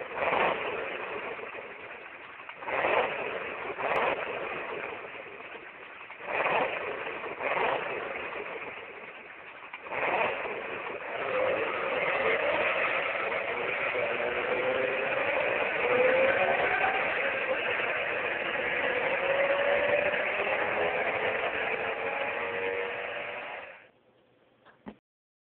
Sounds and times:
Accelerating, revving, vroom: 0.1 - 1.6, 2.6 - 5.2, 6.2 - 8.8, 9.8 - 23.8.

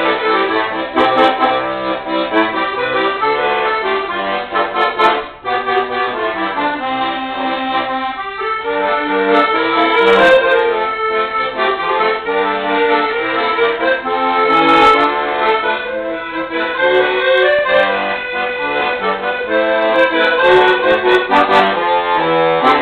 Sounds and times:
Accordion: 0.0 - 22.8.

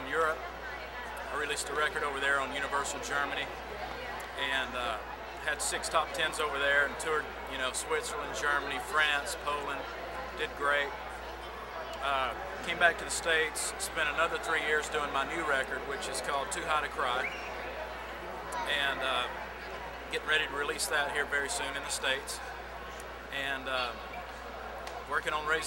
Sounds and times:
Speech: 0.0 - 17.5, 18.4 - 22.5, 23.3 - 24.2, 25.0 - 25.6.

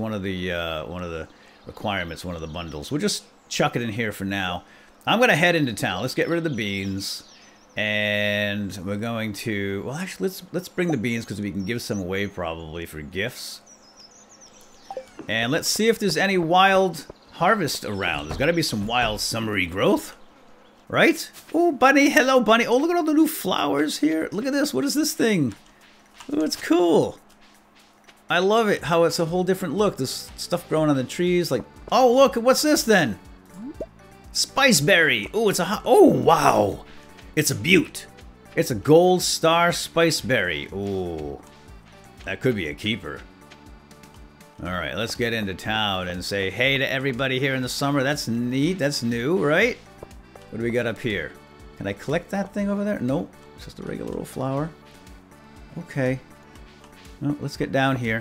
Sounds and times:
Speech: 0.0 - 13.6, 15.2 - 20.2, 20.9 - 25.6, 26.3 - 27.2, 28.3 - 33.8, 34.4 - 36.8, 37.4 - 41.5, 42.2 - 43.3, 44.6 - 49.8, 50.5 - 54.8, 55.8 - 56.3, 57.2 - 58.2.

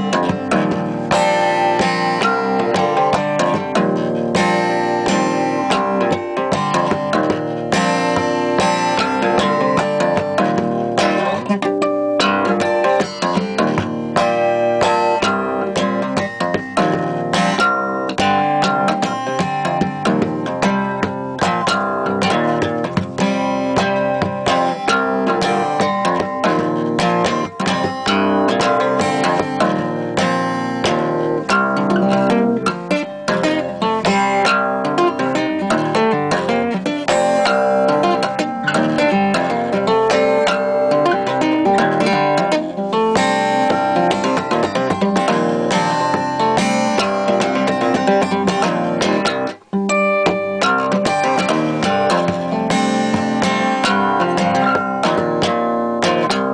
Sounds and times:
Acoustic guitar: 0.0 - 56.5
Strum: 0.0 - 56.5.

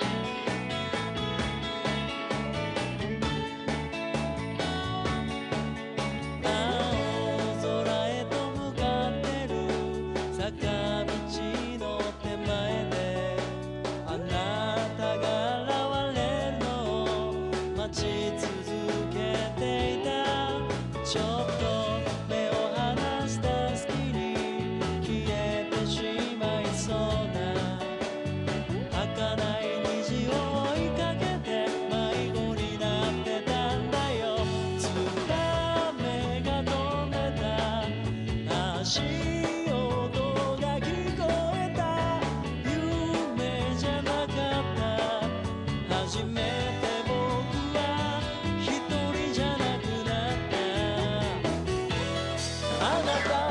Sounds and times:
Music: 0.0 - 53.5.

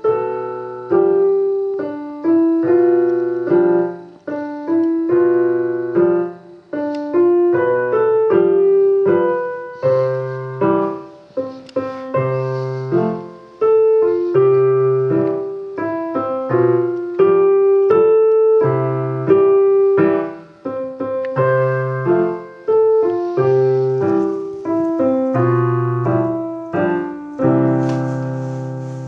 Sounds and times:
Music: 0.0 - 29.0.

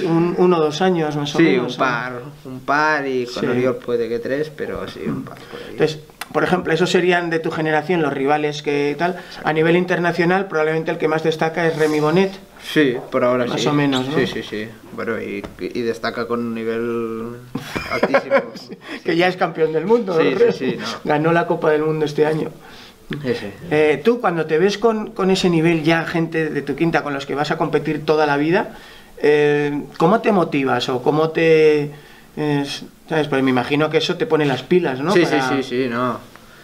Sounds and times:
Male speech, man speaking: 0.0 - 36.3
Inside, small room: 0.0 - 36.6.

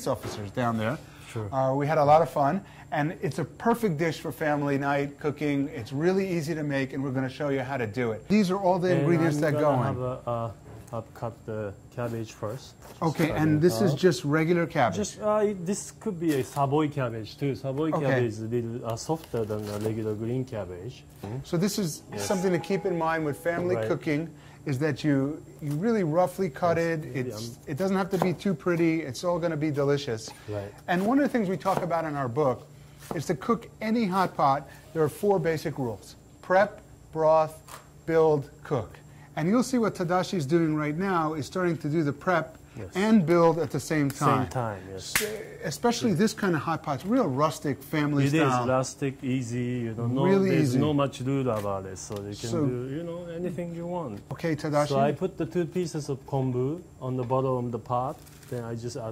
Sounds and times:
Speech: 0.0 - 59.1.

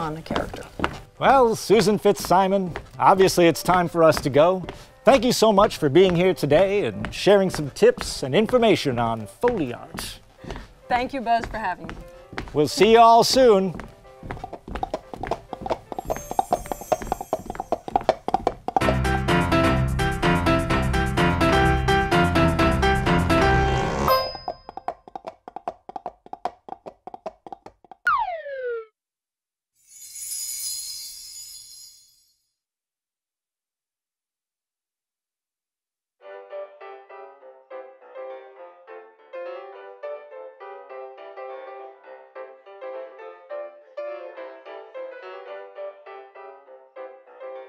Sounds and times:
Music: 0.0 - 24.5, 36.2 - 47.6.

